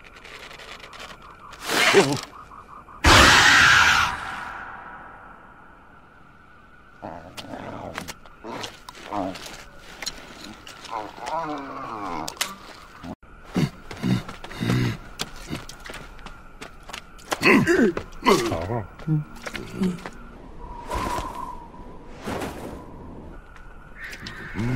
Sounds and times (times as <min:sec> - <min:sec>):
Outside, rural or natural: 0:00.0 - 0:24.7
Wild animals: 0:03.0 - 0:05.2, 0:07.0 - 0:15.7, 0:24.0 - 0:24.7.